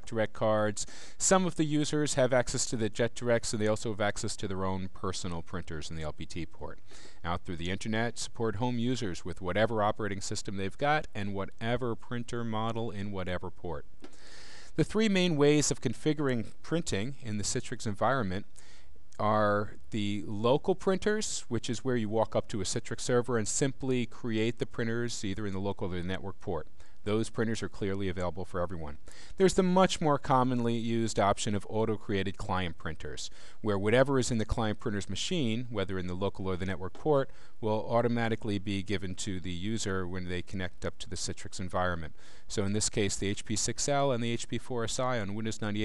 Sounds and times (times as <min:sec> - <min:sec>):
Speech: 0:00.0 - 0:13.9, 0:14.8 - 0:18.5, 0:19.2 - 0:45.8.